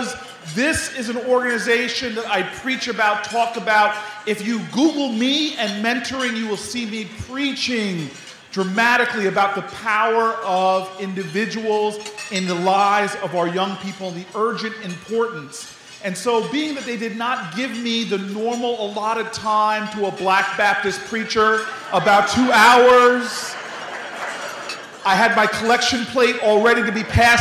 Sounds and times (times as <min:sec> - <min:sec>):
Male speech, man speaking: 0:00.0 - 0:23.6, 0:25.0 - 0:27.4
Narration, monologue: 0:00.0 - 0:27.4.